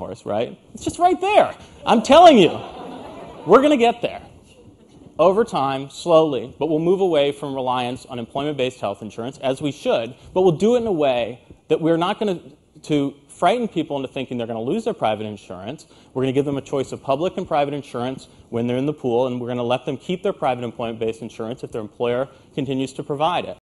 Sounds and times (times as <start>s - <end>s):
Speech: 0.0s - 2.8s, 3.5s - 4.4s, 5.2s - 23.6s.